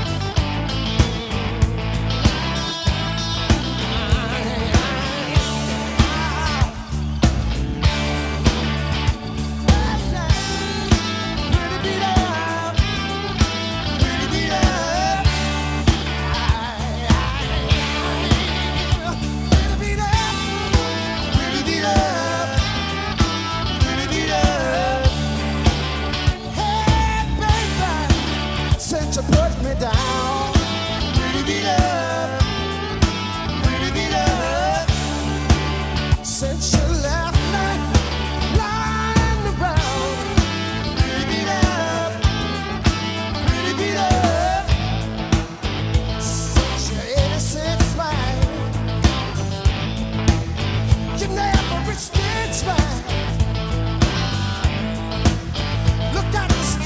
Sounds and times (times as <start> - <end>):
Music: 0.0 - 56.8.